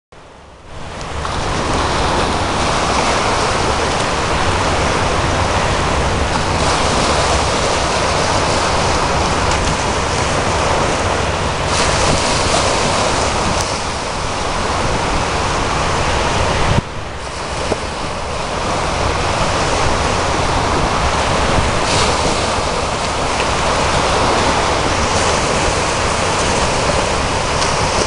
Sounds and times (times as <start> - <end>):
Boat, Water vehicle: 0.2 - 28.0
Waves, surf: 0.2 - 28.0.